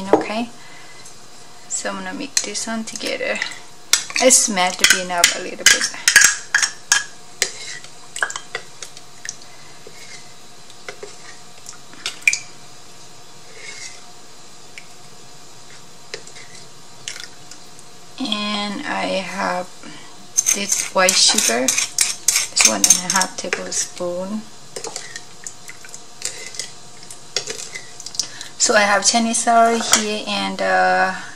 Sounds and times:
Stir: 7.4 - 9.0, 10.9 - 11.4, 20.4 - 23.7, 24.8 - 28.3.

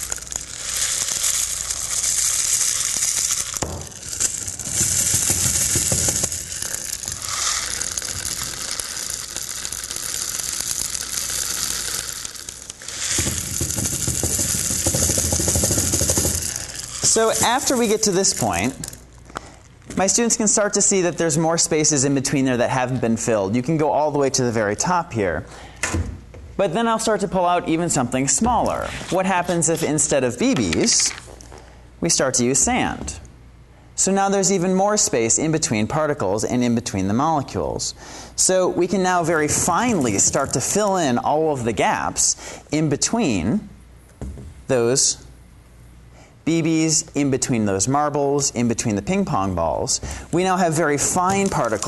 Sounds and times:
Inside, large room or hall: 0.0 - 19.6.

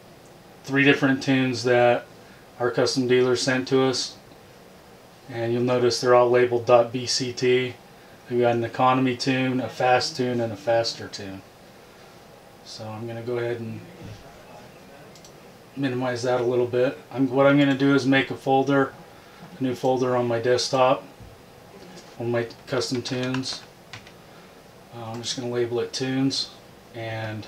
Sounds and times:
Speech: 0.7 - 4.2, 5.3 - 11.5, 12.6 - 15.2, 15.8 - 19.0, 19.6 - 21.1, 21.8 - 23.7, 24.9 - 27.4.

